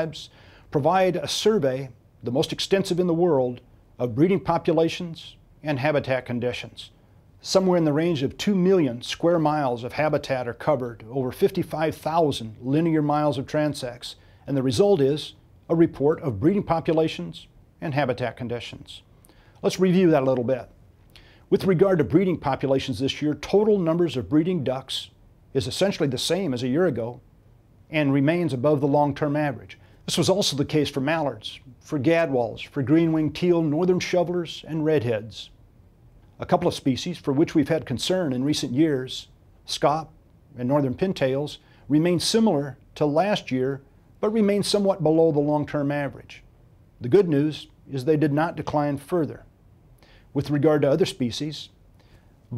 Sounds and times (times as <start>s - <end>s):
Speech: 0.0s - 20.8s, 21.5s - 27.2s, 27.9s - 35.6s, 36.4s - 49.5s, 50.4s - 51.8s.